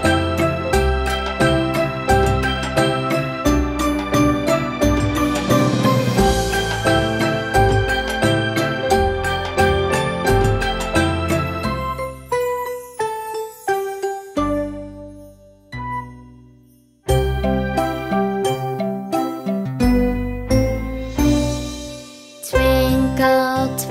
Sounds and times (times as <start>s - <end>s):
Music for children: 0.0s - 23.9s.